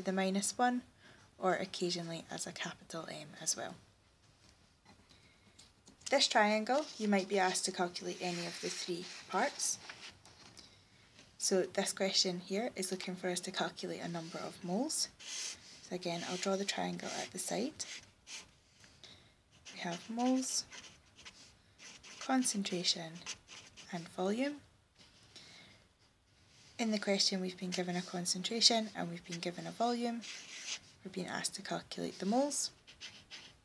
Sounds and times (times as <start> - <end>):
Speech: 0.0 - 3.8, 6.1 - 9.8, 11.4 - 15.2, 15.9 - 17.9, 19.8 - 20.7, 22.2 - 23.3, 23.9 - 24.7, 26.8 - 30.3, 31.0 - 32.8
Inside, small room: 0.0 - 33.6
Writing: 6.4 - 10.2, 14.0 - 18.6, 19.5 - 25.2, 26.5 - 31.1, 32.0 - 33.6.